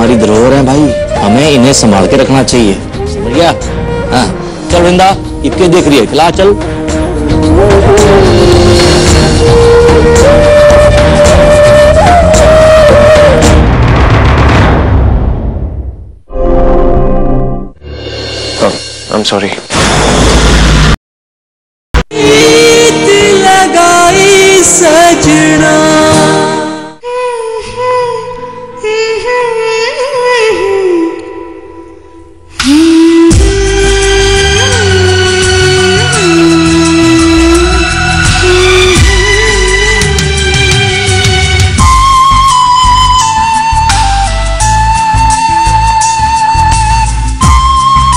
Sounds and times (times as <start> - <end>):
Music: 0.0 - 19.6, 22.1 - 48.1
Speech: 18.6 - 19.7.